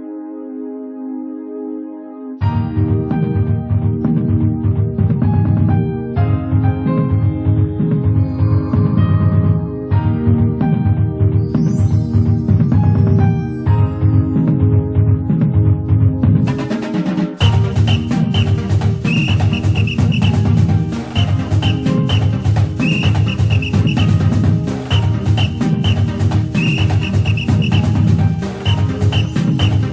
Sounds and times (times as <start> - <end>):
Background music: 0.0 - 29.9.